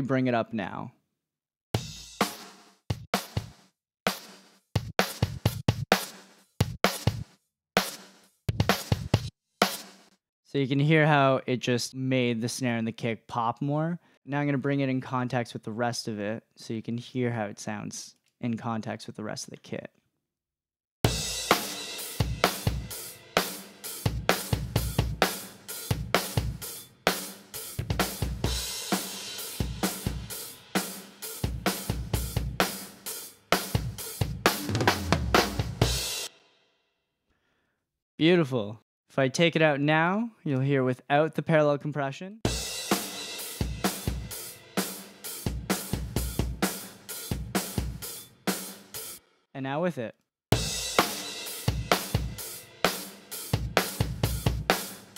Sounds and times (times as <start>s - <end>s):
Drum: 1.8s - 10.1s, 21.1s - 36.4s, 42.5s - 49.2s, 50.6s - 55.1s.